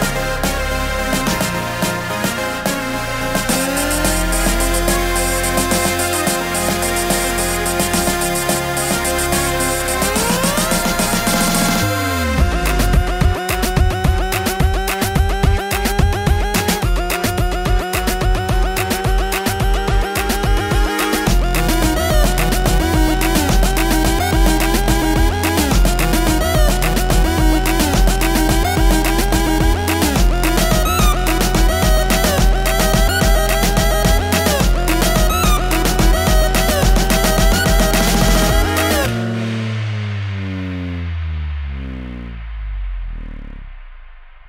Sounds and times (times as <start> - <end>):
Music: 0.0 - 44.4.